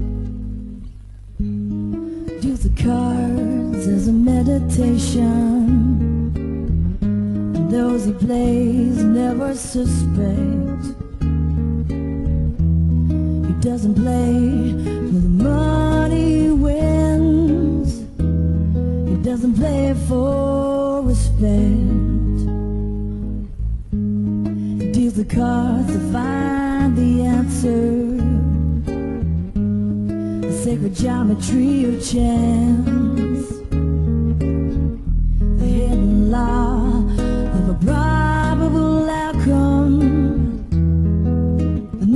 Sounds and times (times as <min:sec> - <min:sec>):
Guitar: 0:00.0 - 0:42.1.